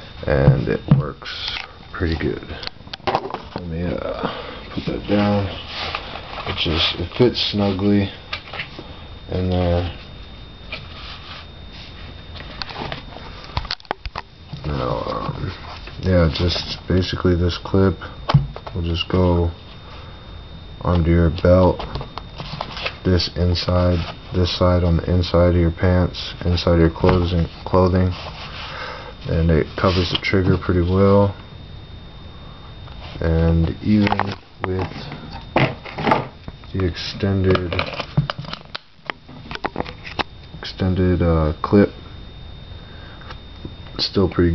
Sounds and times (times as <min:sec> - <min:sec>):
Speech: 0:00.2 - 0:02.6, 0:03.6 - 0:05.6, 0:06.5 - 0:08.2, 0:09.3 - 0:10.0, 0:14.6 - 0:18.1, 0:18.8 - 0:19.6, 0:20.8 - 0:21.9, 0:23.0 - 0:28.2, 0:29.3 - 0:31.4, 0:33.2 - 0:35.2, 0:36.7 - 0:37.9, 0:40.6 - 0:42.0, 0:44.0 - 0:44.5.